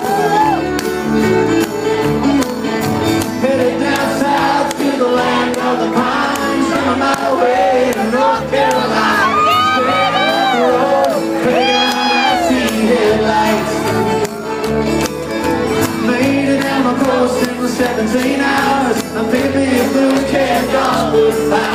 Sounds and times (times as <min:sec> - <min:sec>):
Music: 0:00.0 - 0:21.7.